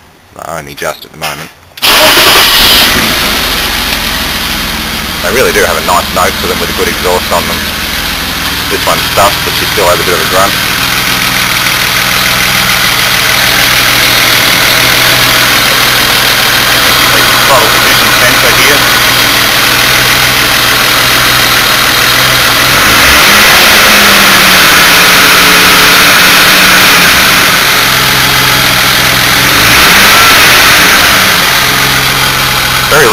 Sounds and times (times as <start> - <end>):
Car: 0.0 - 33.1
Speech: 0.4 - 1.6, 5.2 - 7.6, 8.7 - 10.6, 17.4 - 18.9, 32.9 - 33.1
Idling: 1.8 - 33.1
Vibration: 1.8 - 33.1.